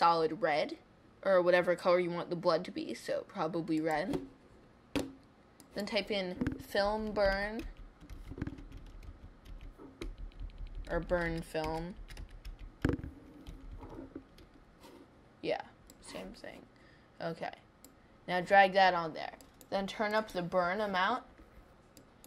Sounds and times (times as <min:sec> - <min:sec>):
Speech: 0:00.0 - 0:04.2, 0:05.8 - 0:07.7, 0:10.9 - 0:12.0, 0:15.4 - 0:17.7, 0:18.3 - 0:21.3.